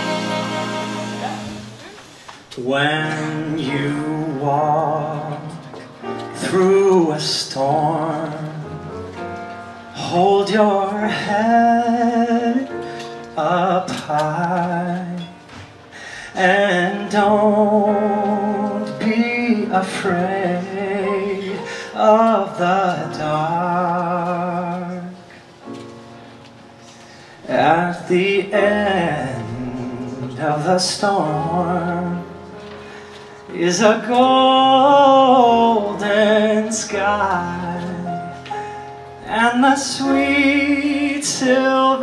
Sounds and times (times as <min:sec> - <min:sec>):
Music: 0:00.0 - 0:42.0.